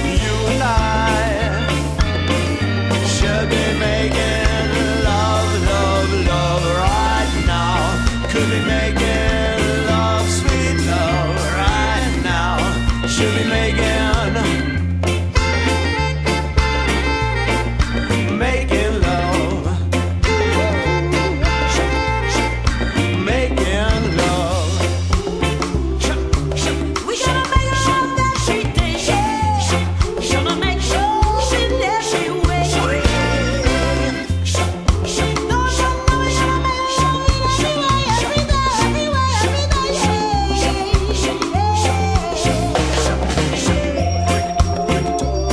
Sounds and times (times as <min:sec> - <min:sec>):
Jazz: 0:00.0 - 0:45.5
Rock and roll: 0:00.0 - 0:45.5.